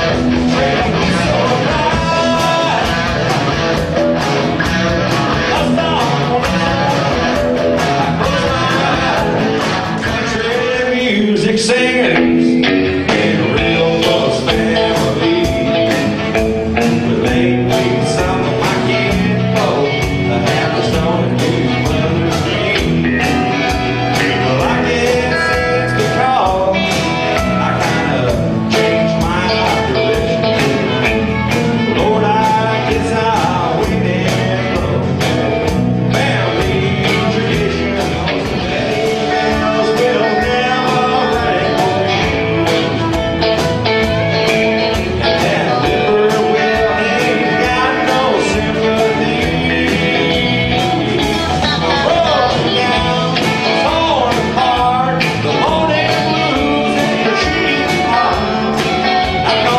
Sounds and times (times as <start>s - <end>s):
Bluegrass: 0.0s - 59.7s.